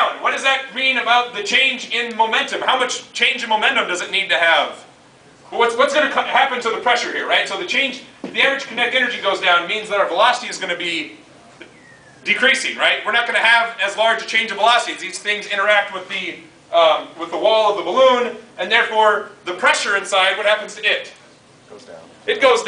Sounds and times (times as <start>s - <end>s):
Speech: 0.0s - 4.9s, 5.5s - 11.2s, 12.2s - 22.6s.